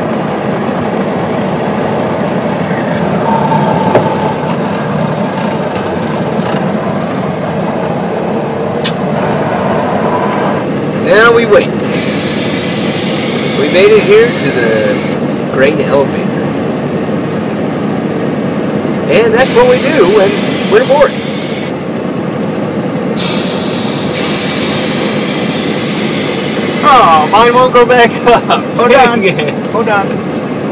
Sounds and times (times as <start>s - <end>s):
Vehicle: 0.0s - 30.7s
Speech: 13.6s - 16.4s, 19.1s - 21.1s, 26.8s - 30.2s.